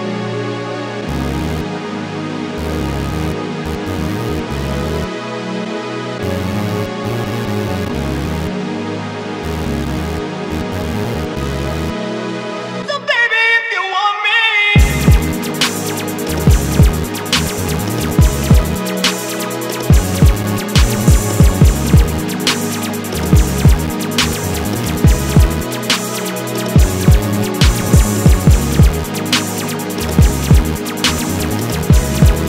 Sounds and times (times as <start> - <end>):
Singing: 12.8 - 32.4.